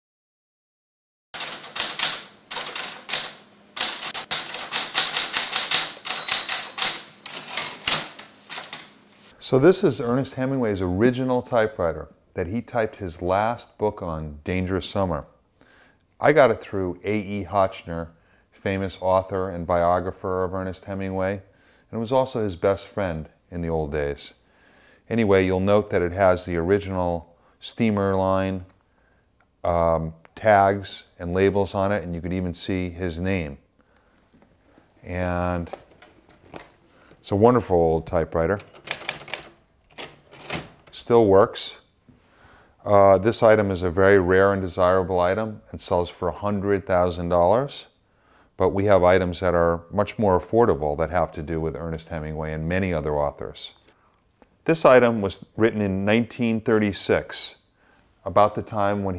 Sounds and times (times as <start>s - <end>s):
Typewriter: 1.4s - 9.0s, 38.6s - 41.0s
Speech: 9.4s - 15.4s, 16.2s - 24.4s, 25.1s - 28.7s, 29.6s - 33.6s, 35.0s - 35.8s, 37.2s - 38.6s, 40.9s - 41.9s, 42.8s - 47.9s, 48.6s - 53.8s, 54.6s - 57.6s, 58.2s - 59.1s.